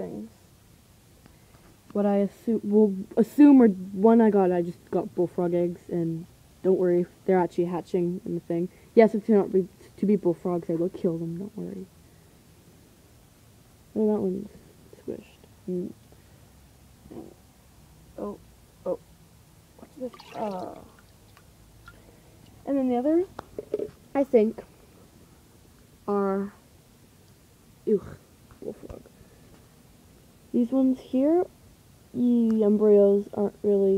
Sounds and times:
Speech: 0:00.0 - 0:00.4, 0:01.9 - 0:11.9, 0:14.0 - 0:16.0, 0:18.2 - 0:19.0, 0:19.8 - 0:21.0, 0:22.6 - 0:23.4, 0:24.2 - 0:24.7, 0:26.1 - 0:26.6, 0:27.8 - 0:29.1, 0:30.5 - 0:31.5, 0:32.2 - 0:33.9.

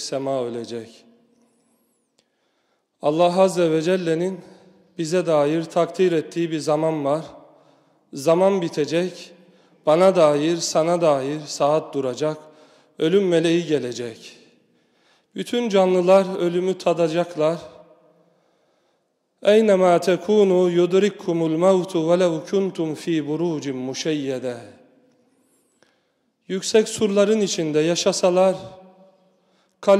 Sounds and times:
Speech: 0:00.0 - 0:01.1, 0:03.0 - 0:07.4, 0:08.1 - 0:12.4, 0:13.0 - 0:14.5, 0:15.4 - 0:17.8, 0:19.4 - 0:24.8, 0:26.5 - 0:28.8.

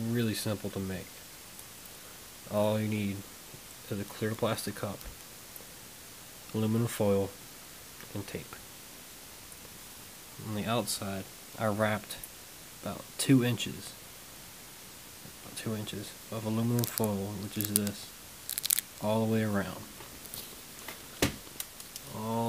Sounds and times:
Speech: 0:00.0 - 0:01.2, 0:02.5 - 0:05.1, 0:06.5 - 0:07.4, 0:08.1 - 0:08.6, 0:10.4 - 0:14.0, 0:15.4 - 0:18.1, 0:19.0 - 0:19.9, 0:22.1 - 0:22.4.

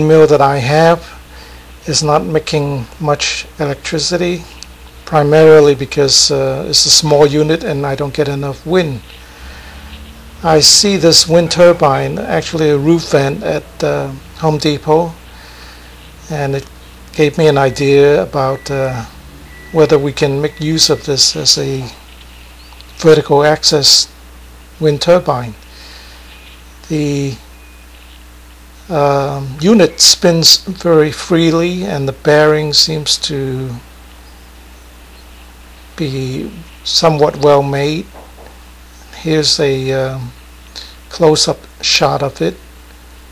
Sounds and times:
Speech: 0:00.0 - 0:01.2, 0:01.8 - 0:04.5, 0:05.1 - 0:09.1, 0:10.4 - 0:15.2, 0:16.3 - 0:19.1, 0:19.8 - 0:22.0, 0:23.0 - 0:24.2, 0:24.8 - 0:25.6, 0:26.9 - 0:27.4, 0:28.9 - 0:33.9, 0:36.0 - 0:38.1, 0:39.2 - 0:40.4, 0:41.1 - 0:42.6.

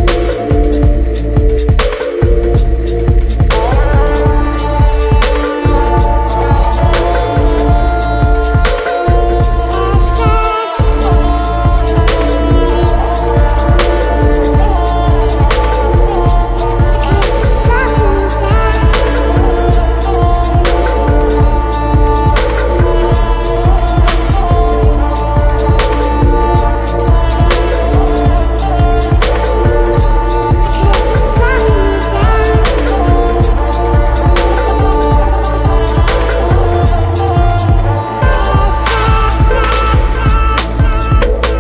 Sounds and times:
Music: 0:00.0 - 0:41.6.

